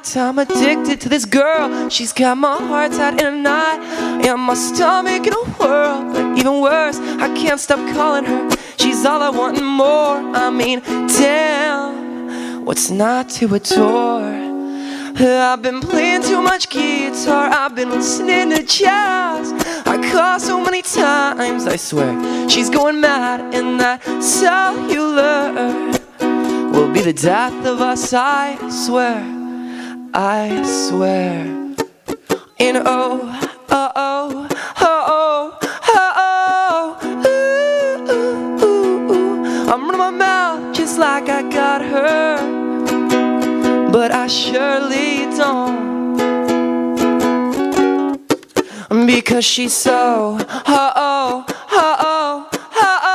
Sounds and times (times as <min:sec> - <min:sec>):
Music: 0:00.0 - 0:53.1.